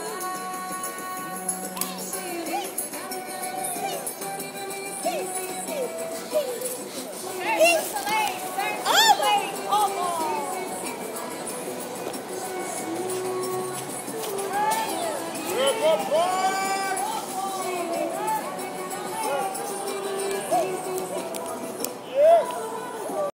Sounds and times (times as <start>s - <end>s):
Music: 0.0s - 23.3s
Outside, urban or manmade: 0.0s - 23.3s.